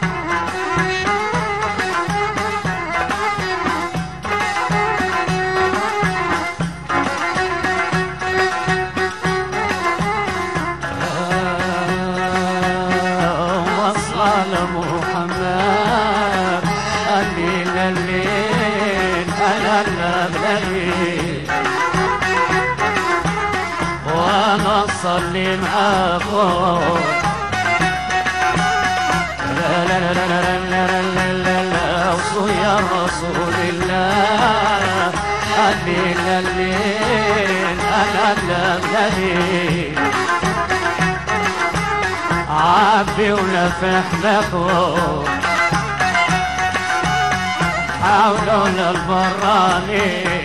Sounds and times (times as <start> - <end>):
Music: 0.0 - 50.4.